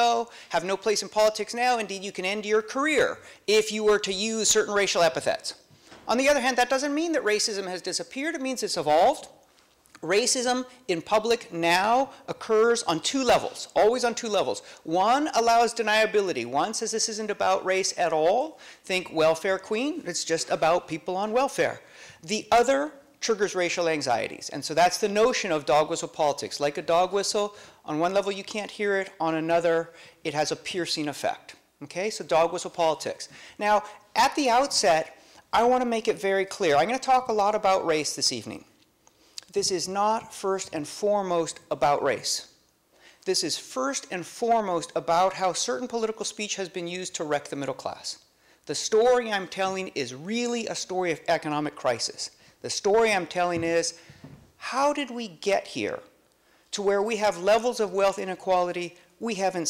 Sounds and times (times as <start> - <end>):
Speech: 0.0 - 9.4, 10.0 - 38.7, 39.4 - 42.6, 43.2 - 54.0, 54.6 - 59.6.